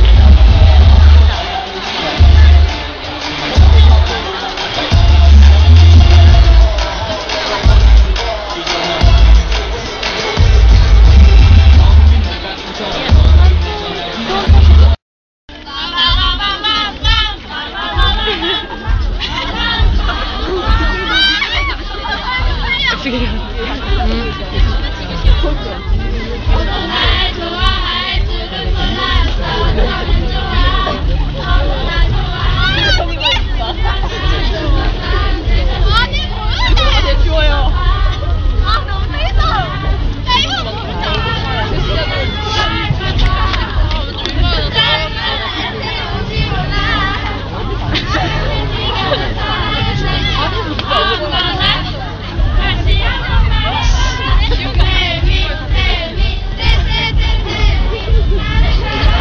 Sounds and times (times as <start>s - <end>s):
Music: 0.0s - 59.2s.